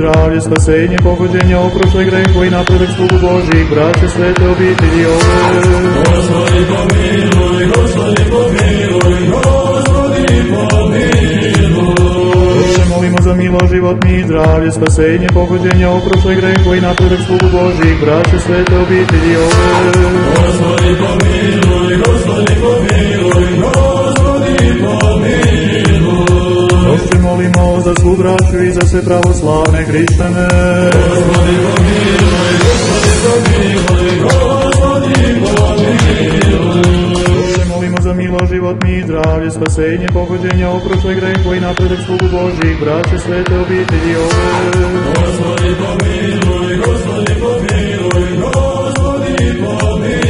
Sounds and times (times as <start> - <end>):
Techno: 0.0 - 50.3.